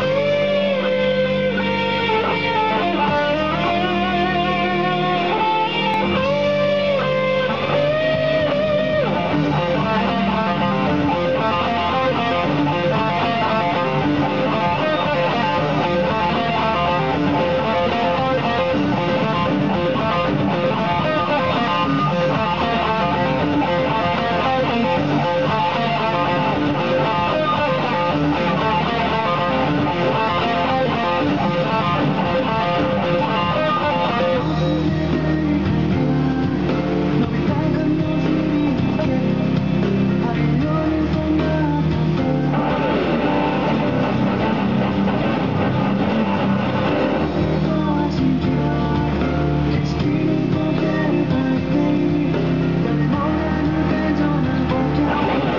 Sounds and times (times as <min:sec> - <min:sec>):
Guitar: 0:00.0 - 0:55.5.